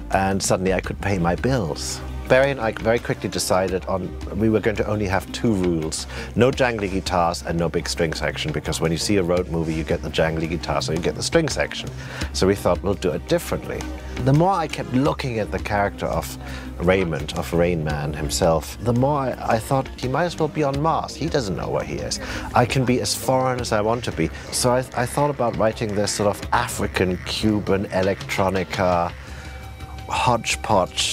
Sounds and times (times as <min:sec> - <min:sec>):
Speech: 0:00.0 - 0:29.2, 0:30.0 - 0:31.1
Music: 0:00.0 - 0:31.1.